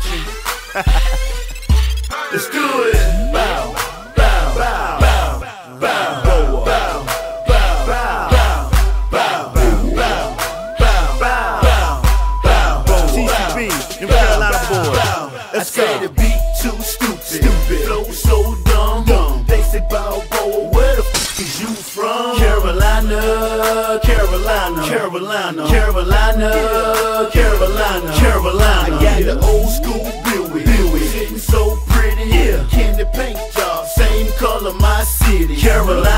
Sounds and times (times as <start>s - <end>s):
Rhythm and blues: 0.0s - 25.1s, 25.7s - 36.1s
Dance music: 0.0s - 36.1s.